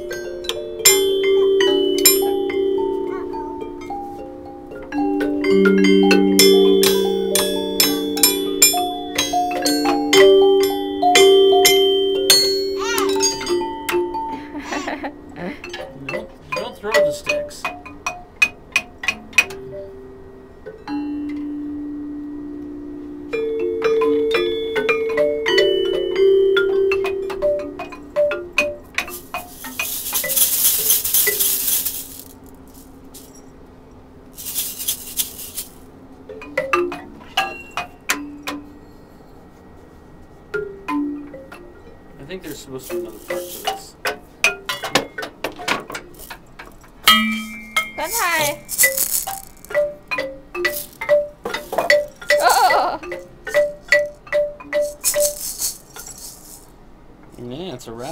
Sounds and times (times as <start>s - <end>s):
Marimba, xylophone: 0.0s - 32.4s, 34.4s - 39.2s, 40.5s - 46.4s, 47.0s - 56.3s
Speech: 16.0s - 17.7s, 42.2s - 44.0s, 48.0s - 48.6s, 57.4s - 58.1s.